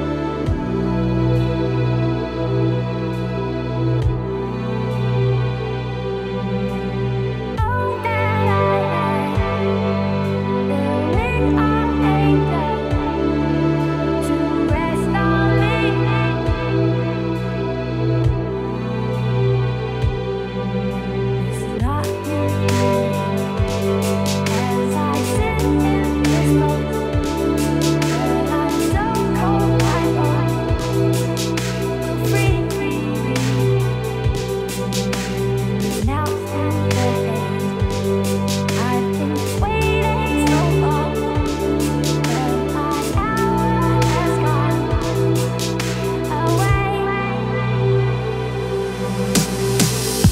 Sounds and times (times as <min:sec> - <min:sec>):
Electronic music: 0:00.0 - 0:50.3.